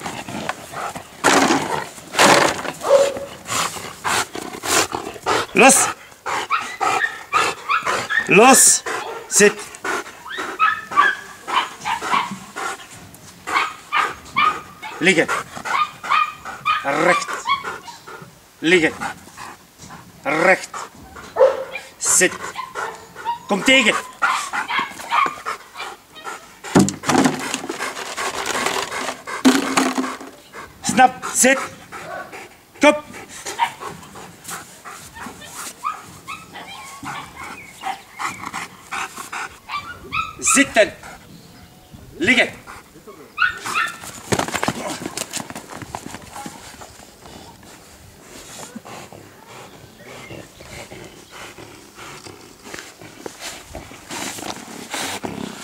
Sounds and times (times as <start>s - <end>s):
Bark: 2.8s - 3.3s, 6.5s - 8.4s, 9.0s - 9.4s, 10.6s - 12.4s, 13.5s - 15.0s, 15.7s - 17.7s, 21.4s - 21.9s, 24.0s - 26.0s, 32.0s - 32.3s, 33.6s - 33.8s, 43.4s - 44.0s.